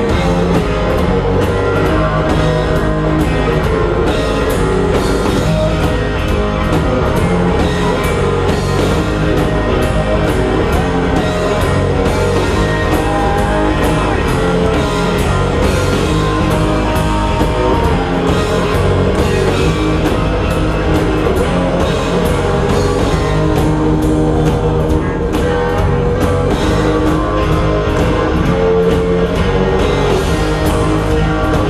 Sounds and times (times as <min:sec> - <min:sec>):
Guitar: 0:00.0 - 0:31.7.